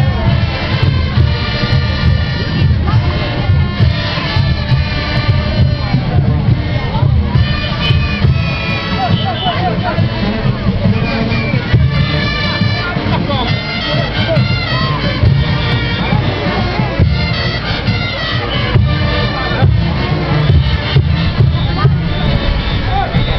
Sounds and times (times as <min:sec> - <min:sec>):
Happy music: 0:00.0 - 0:23.3
Speech: 0:00.0 - 0:23.3.